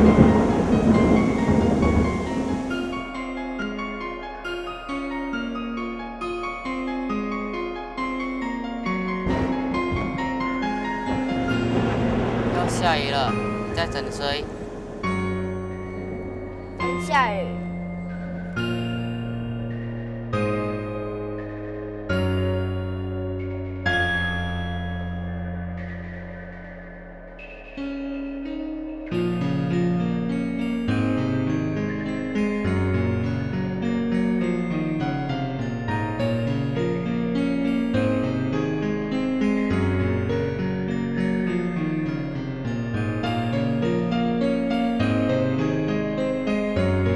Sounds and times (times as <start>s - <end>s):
Music: 0.0s - 47.1s.